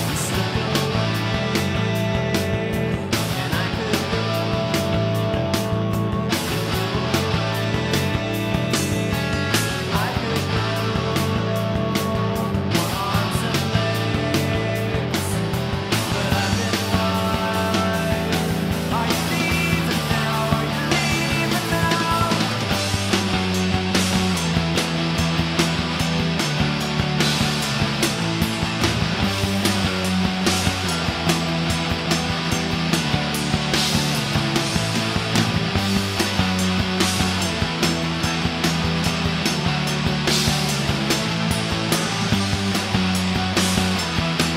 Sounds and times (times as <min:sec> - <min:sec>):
Progressive rock: 0:00.0 - 0:44.5.